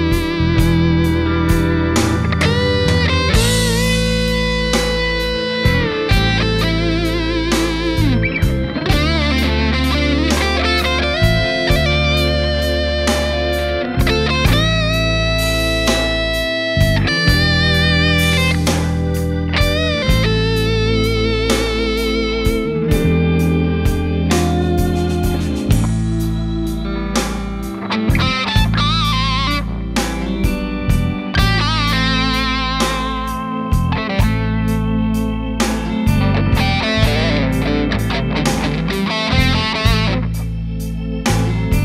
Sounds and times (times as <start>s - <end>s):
Music: 0.0s - 41.8s.